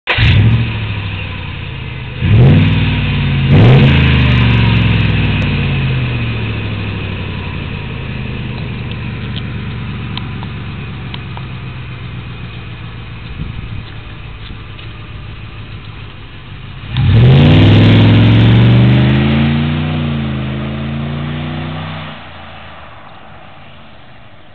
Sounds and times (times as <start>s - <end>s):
Outside, urban or manmade: 0.0s - 24.5s
Vehicle: 0.0s - 24.5s.